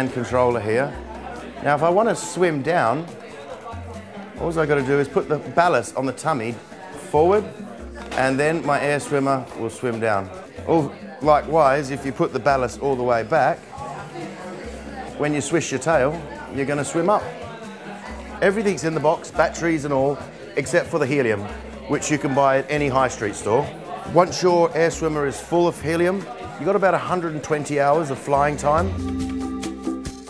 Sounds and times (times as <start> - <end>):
Speech: 0.0 - 29.0
Music: 0.0 - 30.3.